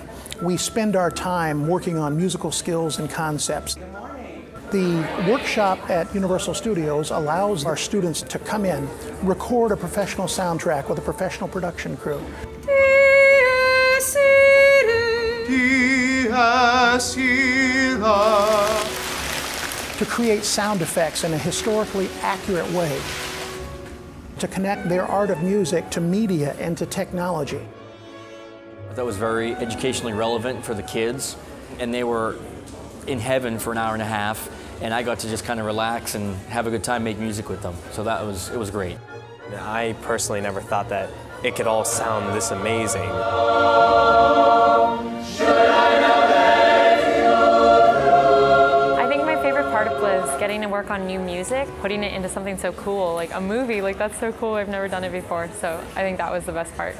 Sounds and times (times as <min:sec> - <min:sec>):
Music: 0:00.0 - 0:56.9.